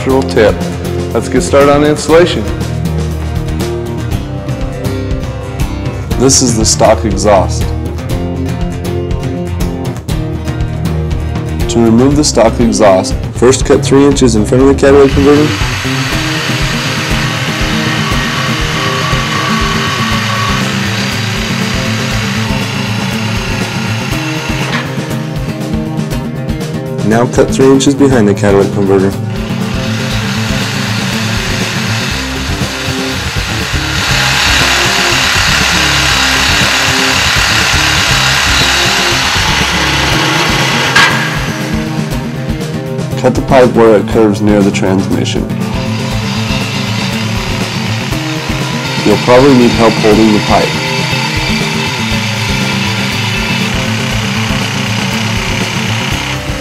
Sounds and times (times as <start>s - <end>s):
Speech: 0.0s - 0.6s, 1.2s - 2.6s, 6.2s - 7.7s, 11.7s - 15.6s, 27.0s - 29.2s, 43.2s - 45.5s, 49.0s - 50.8s
Music: 0.0s - 56.6s.